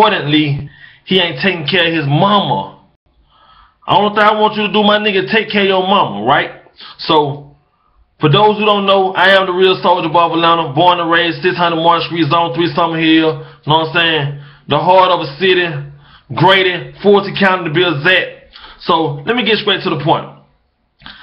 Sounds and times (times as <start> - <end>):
Speech: 0.0 - 2.8, 3.9 - 7.5, 8.2 - 20.5.